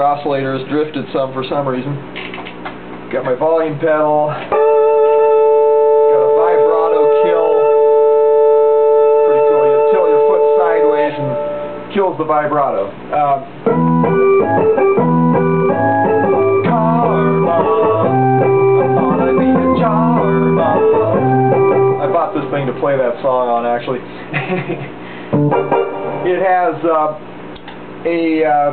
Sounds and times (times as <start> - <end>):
Speech: 0.0 - 2.0, 3.1 - 4.5, 6.1 - 7.7, 9.9 - 13.5, 22.0 - 24.2, 26.3 - 27.2, 28.0 - 28.7
Music: 4.5 - 11.9, 13.6 - 22.9, 25.3 - 26.7.